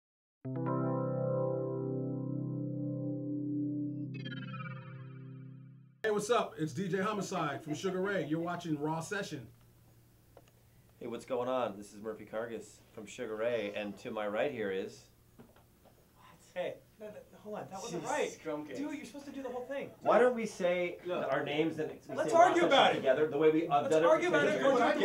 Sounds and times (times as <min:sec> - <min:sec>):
Synthesizer: 0:00.5 - 0:06.0.